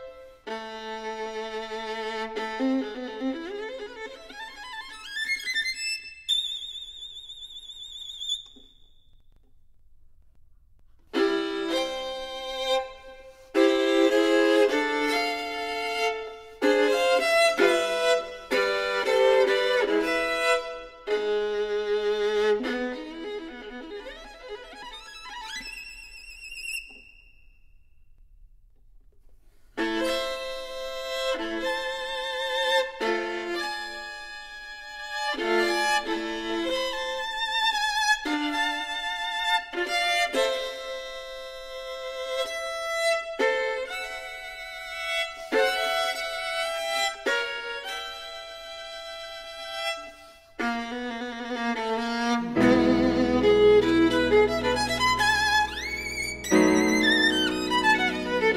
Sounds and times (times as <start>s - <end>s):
Violin, fiddle: 0.0s - 8.7s, 11.1s - 27.2s, 29.8s - 58.5s.